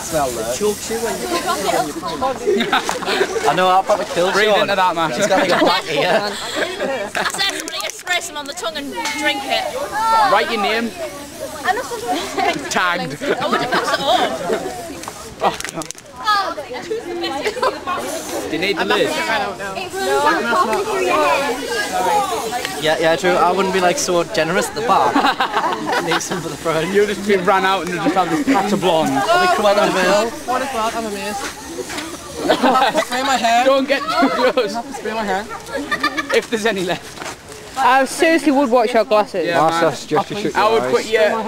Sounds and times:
Spray: 0.0 - 4.5, 7.2 - 16.0, 17.4 - 23.9, 25.1 - 33.8.

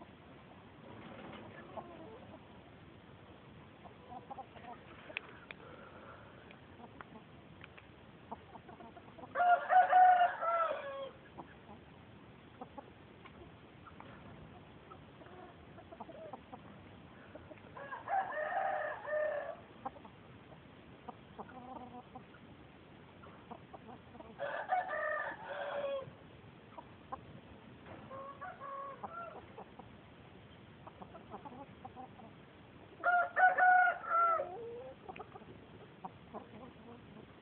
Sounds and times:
Chicken, rooster: 1.0 - 2.6, 3.8 - 5.5, 8.3 - 11.9, 12.6 - 22.4, 23.2 - 27.3, 27.9 - 29.9, 30.8 - 32.4, 33.0 - 37.4.

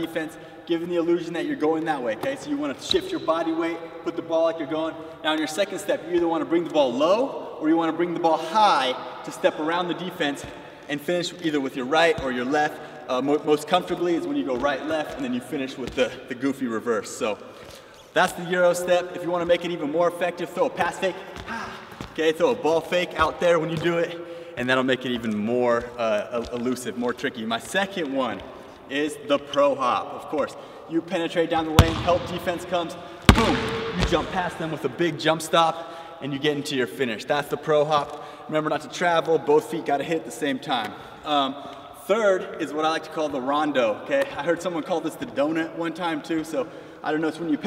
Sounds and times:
Speech: 0.0 - 17.4, 18.2 - 47.6
Basketball bounce: 31.8 - 32.5, 33.2 - 34.4.

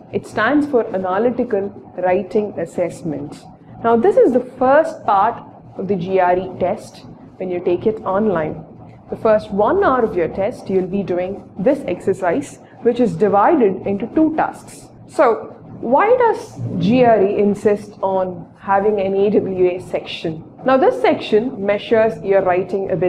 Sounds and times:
Speech: 0.1 - 8.6, 9.2 - 23.0.

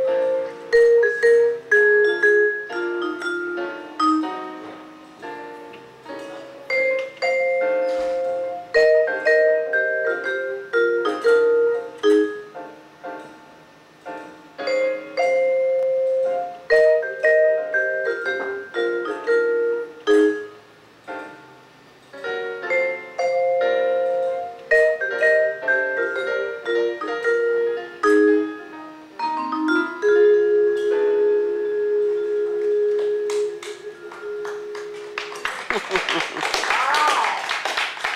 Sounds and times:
Vibraphone: 0.0 - 13.4, 14.1 - 21.4, 22.2 - 35.0.

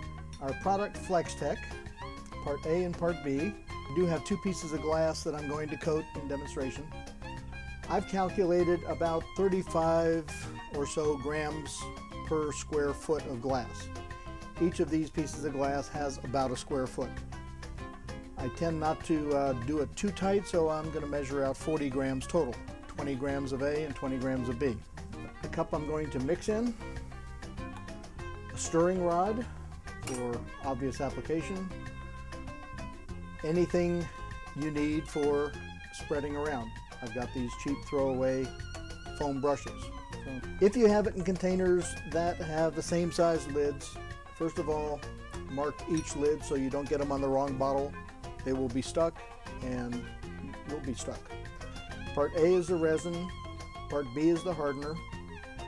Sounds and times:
Music: 0.0 - 55.6
Speech: 0.4 - 1.7, 2.4 - 6.9, 7.9 - 13.9, 14.6 - 17.1, 18.4 - 24.8, 25.4 - 26.8, 28.6 - 29.5, 30.1 - 31.7, 33.4 - 38.5, 39.2 - 51.3, 52.2 - 53.3, 53.9 - 55.0.

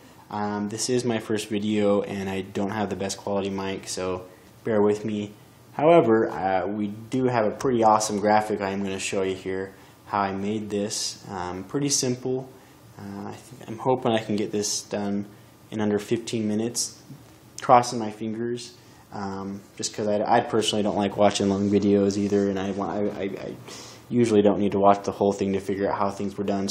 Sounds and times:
Speech: 0.3 - 26.7.

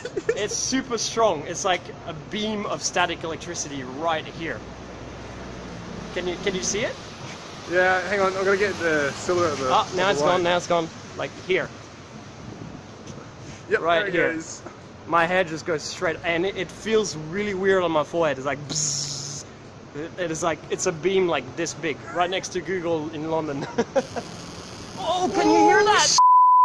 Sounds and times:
Speech: 0.0 - 4.6, 6.2 - 7.0, 7.7 - 11.7, 13.7 - 23.7, 25.0 - 26.2.

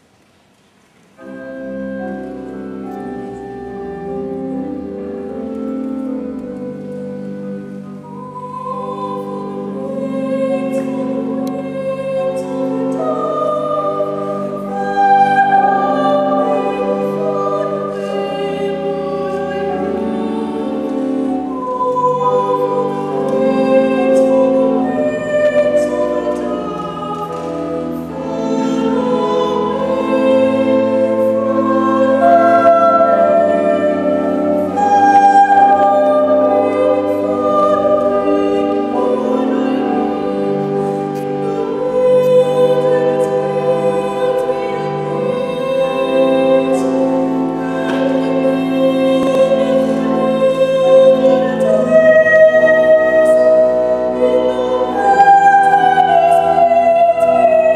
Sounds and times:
Music: 0.0 - 57.7.

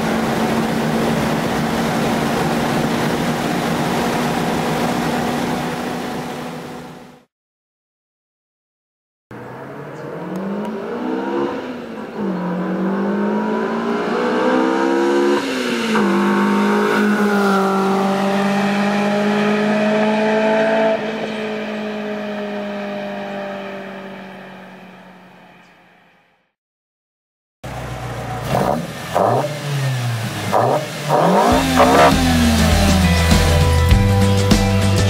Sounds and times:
Race car, auto racing: 0.0 - 7.2, 9.3 - 26.2, 27.7 - 33.9.

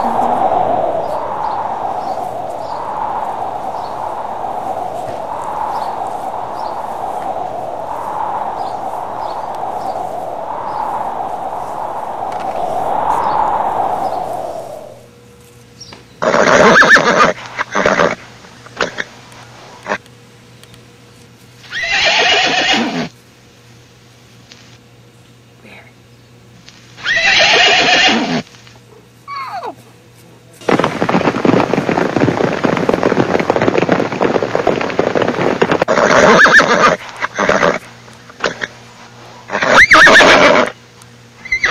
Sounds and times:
Neigh, whinny: 16.2 - 18.2, 21.7 - 23.1, 27.0 - 28.4, 35.9 - 37.8, 39.5 - 40.7, 41.5 - 41.7
Speech: 25.6 - 26.0, 29.6 - 30.7.

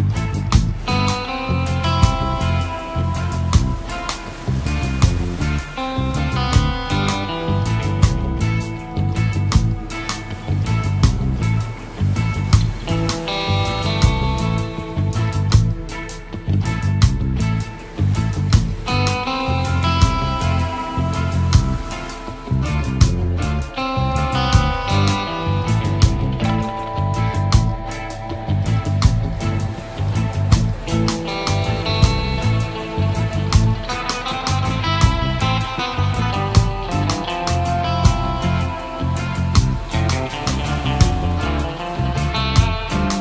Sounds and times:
Soul music: 0.0 - 43.2.

